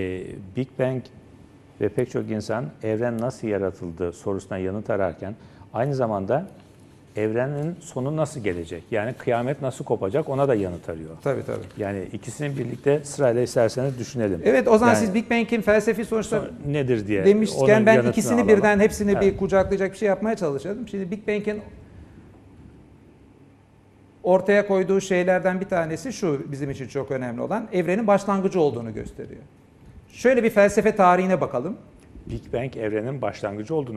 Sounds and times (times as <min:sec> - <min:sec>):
Speech: 0:07.2 - 0:21.7, 0:30.2 - 0:33.9.